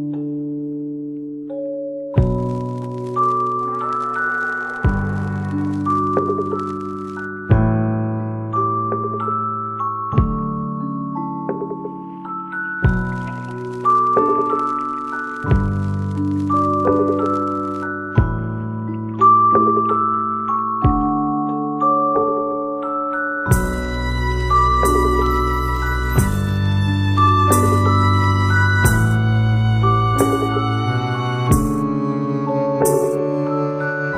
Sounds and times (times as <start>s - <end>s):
Musical instrument: 2.2s - 7.5s, 10.8s - 34.1s.